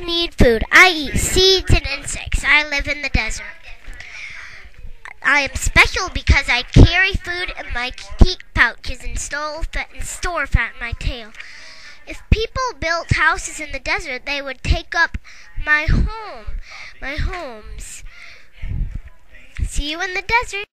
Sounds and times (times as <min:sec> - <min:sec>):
Speech: 0:00.0 - 0:20.7.